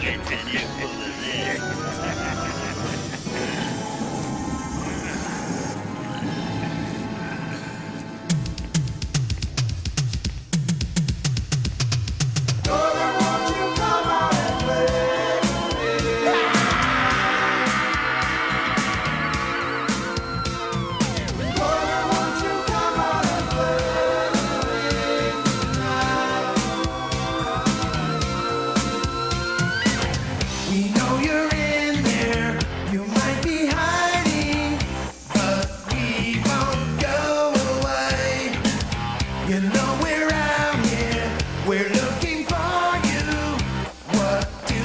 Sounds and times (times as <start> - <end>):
Music: 0.0 - 44.8.